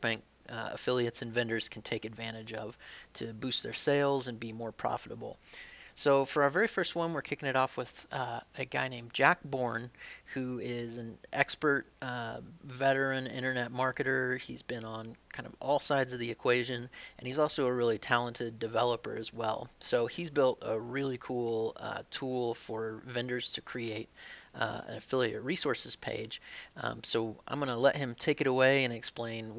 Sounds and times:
Speech: 0.0 - 5.4, 6.0 - 29.5.

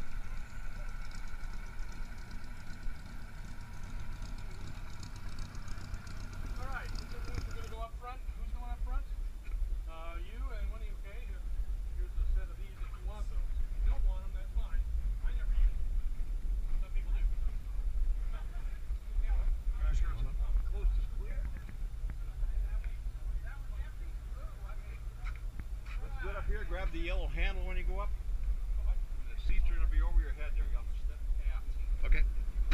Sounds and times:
Speech: 16.7 - 28.1.

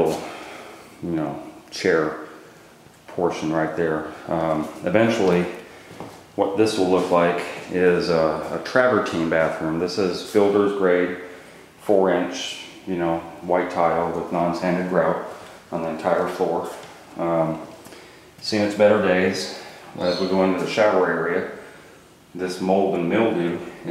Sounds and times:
Speech: 0.0 - 2.4, 3.1 - 5.7, 6.4 - 17.8, 18.4 - 21.6, 22.4 - 23.9.

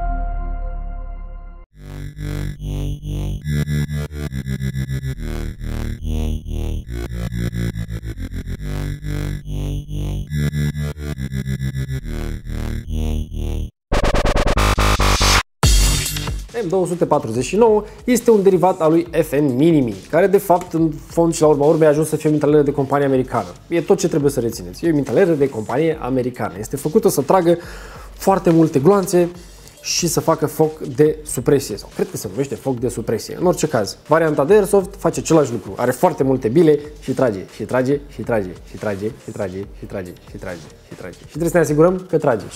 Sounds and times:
Music: 0.0 - 1.7, 14.4 - 42.5.

